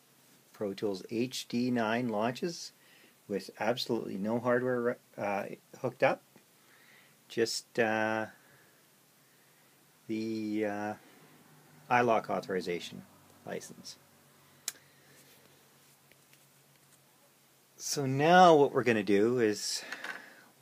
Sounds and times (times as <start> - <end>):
Speech: 0.6 - 6.2, 7.3 - 8.4, 10.1 - 11.0, 11.9 - 14.0, 17.8 - 19.9.